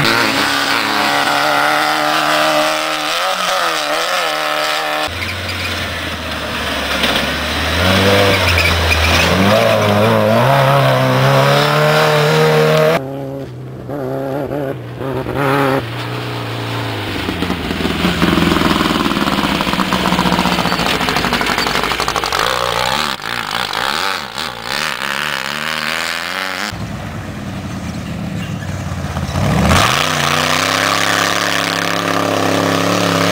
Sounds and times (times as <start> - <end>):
Race car, auto racing: 0.0 - 33.3.